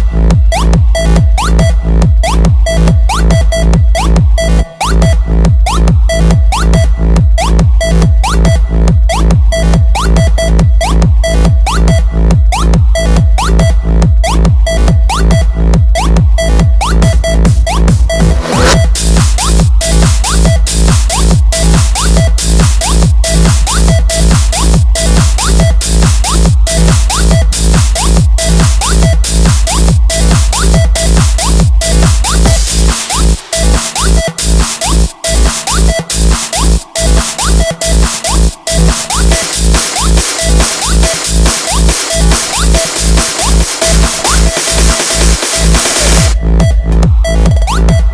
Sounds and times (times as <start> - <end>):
House music: 0.0 - 48.1.